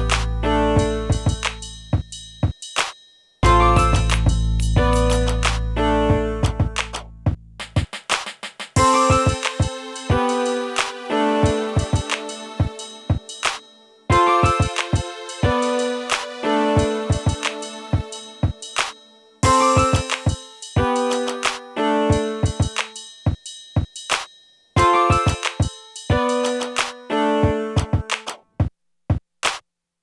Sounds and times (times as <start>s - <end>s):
Drum machine: 0.0s - 29.6s.